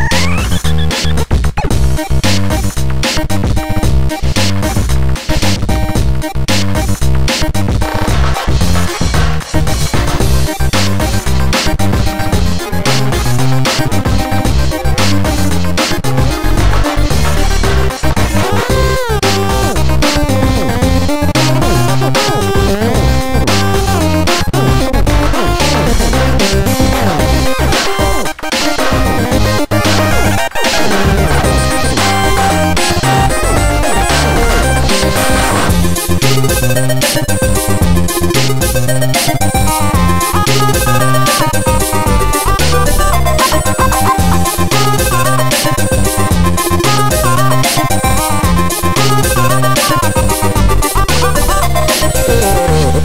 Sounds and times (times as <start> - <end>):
Music: 0.0 - 53.0.